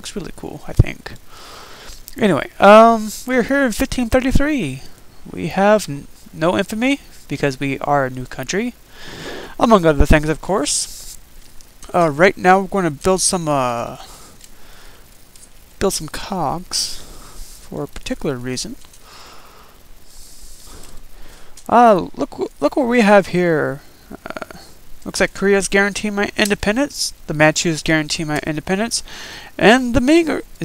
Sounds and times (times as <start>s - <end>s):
Speech: 0.0s - 1.2s, 2.2s - 8.8s, 9.6s - 11.0s, 11.9s - 14.1s, 15.8s - 17.0s, 17.7s - 18.8s, 21.7s - 29.0s, 29.6s - 30.6s.